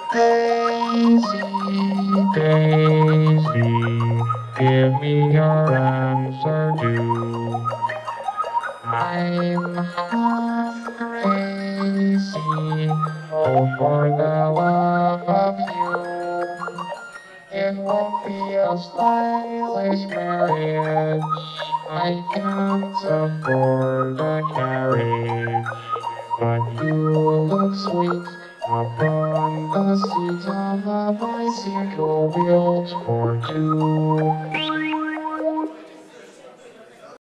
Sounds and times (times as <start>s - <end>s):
Music: 0.0s - 36.2s.